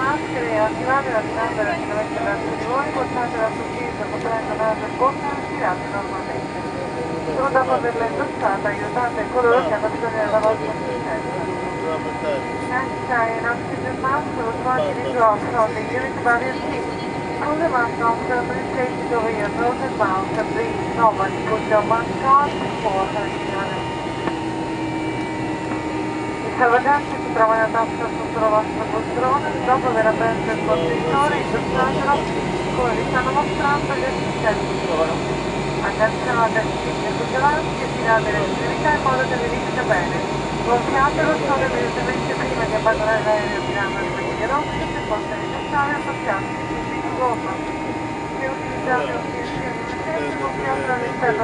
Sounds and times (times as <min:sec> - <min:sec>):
Speech: 0:00.0 - 0:23.8, 0:26.5 - 0:47.6, 0:48.4 - 0:51.4.